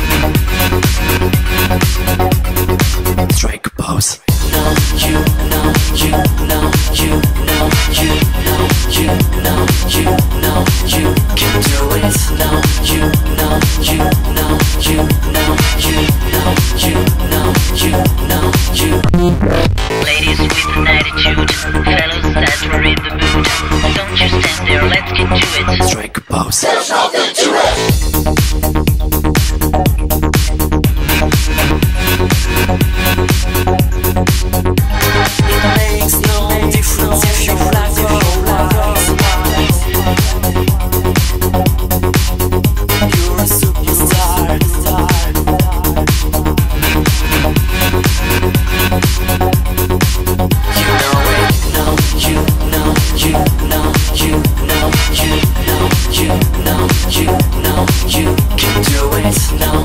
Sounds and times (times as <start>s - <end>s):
Music: 0.0s - 3.6s, 4.2s - 59.8s.